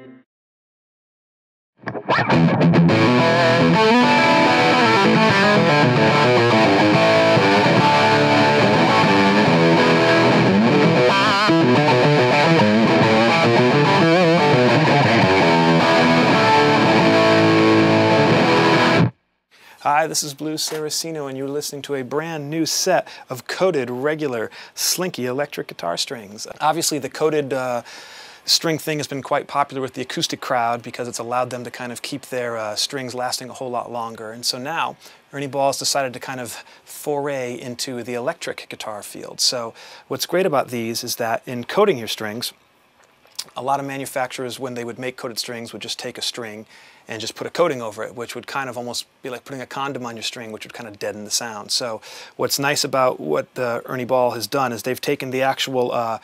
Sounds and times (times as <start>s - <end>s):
Speech: 19.8s - 27.8s, 28.5s - 42.6s, 43.4s - 56.2s.